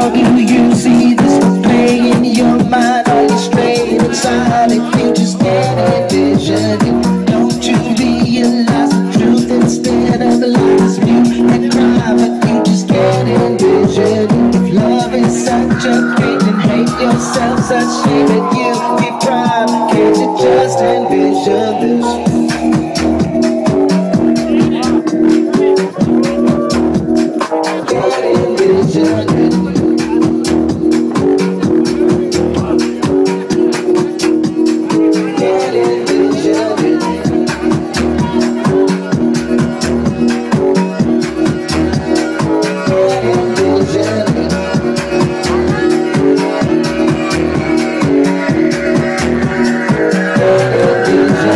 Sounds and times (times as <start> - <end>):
Music: 0.0 - 51.5
Speech: 8.3 - 22.5, 24.3 - 26.9, 31.6 - 40.7, 45.2 - 47.8.